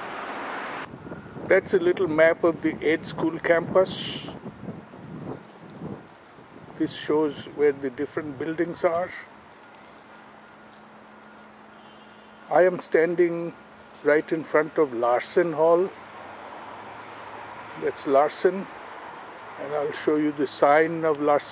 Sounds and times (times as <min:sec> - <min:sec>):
Speech: 0:01.5 - 0:04.4, 0:06.8 - 0:09.3, 0:12.5 - 0:16.0, 0:17.8 - 0:18.7, 0:19.6 - 0:21.5.